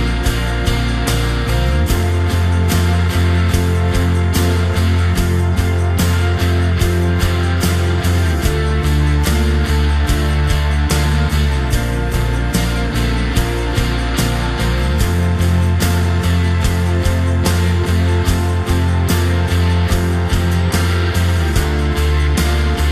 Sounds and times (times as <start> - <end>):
Music: 0.0 - 22.9.